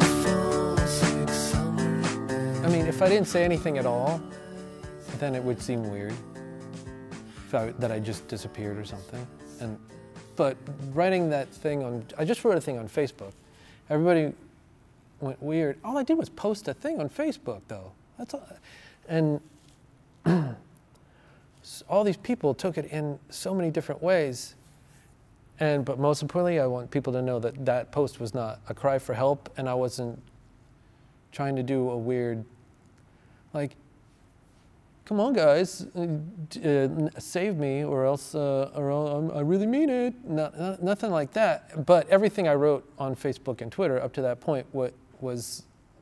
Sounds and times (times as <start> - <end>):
Speech: 2.6 - 4.2, 5.1 - 6.2, 7.5 - 9.8, 10.4 - 14.5, 15.2 - 19.5, 21.6 - 24.6, 25.6 - 30.3, 31.3 - 32.6, 33.5 - 33.8, 35.0 - 45.7.